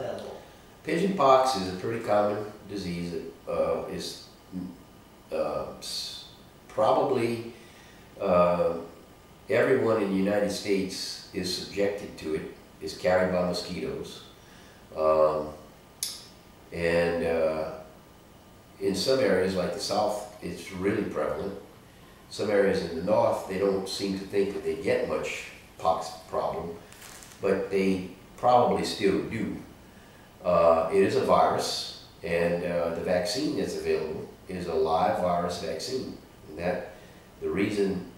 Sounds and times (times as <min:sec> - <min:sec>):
Speech: 0:00.0 - 0:07.6, 0:08.2 - 0:08.9, 0:09.5 - 0:14.3, 0:14.9 - 0:15.6, 0:16.7 - 0:17.9, 0:18.8 - 0:21.7, 0:22.3 - 0:26.8, 0:27.4 - 0:29.7, 0:30.4 - 0:38.1.